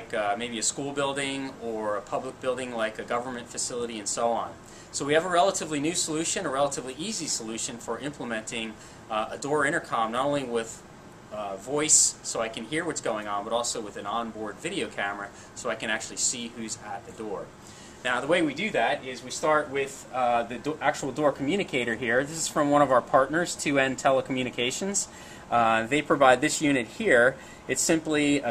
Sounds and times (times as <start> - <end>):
Speech: 0.0 - 28.5.